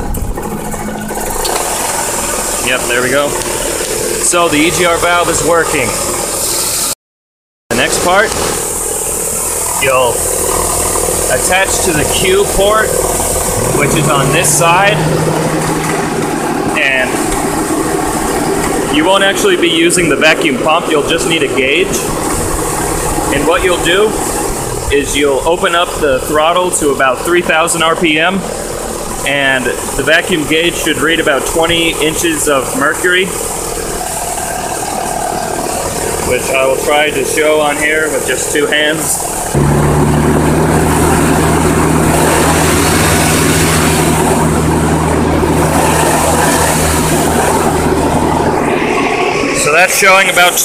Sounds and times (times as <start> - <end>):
Idling: 0.0 - 6.9, 7.7 - 50.6
Motor vehicle (road): 0.0 - 7.0, 7.7 - 50.6.